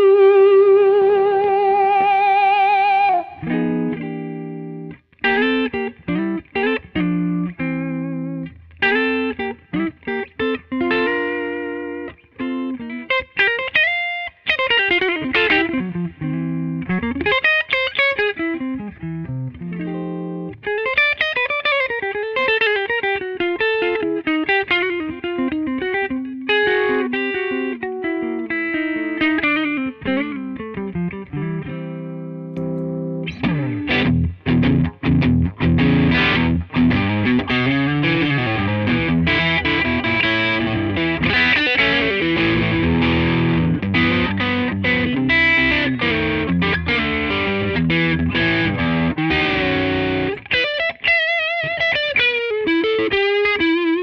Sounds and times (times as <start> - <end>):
Music: 0.0 - 54.0.